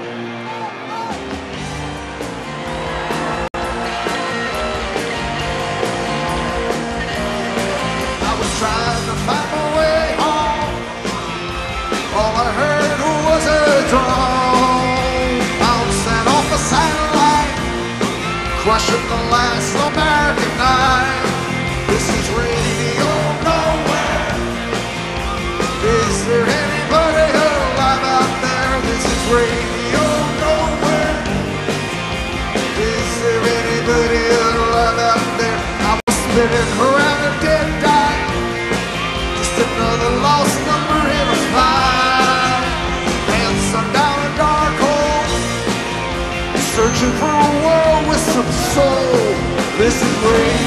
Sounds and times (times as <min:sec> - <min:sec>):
Music: 0:00.0 - 0:50.6.